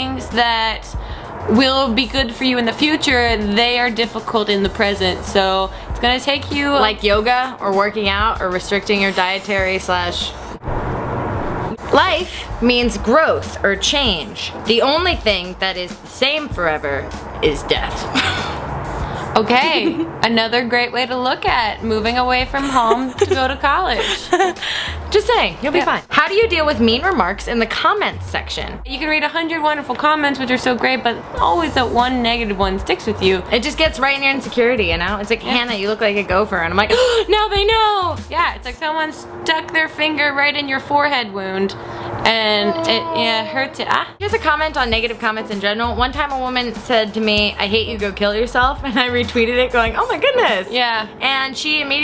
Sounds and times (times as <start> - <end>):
Speech: 0.0 - 10.4, 11.7 - 18.1, 19.4 - 24.1, 25.1 - 52.0
Music: 0.0 - 10.6, 11.7 - 52.0.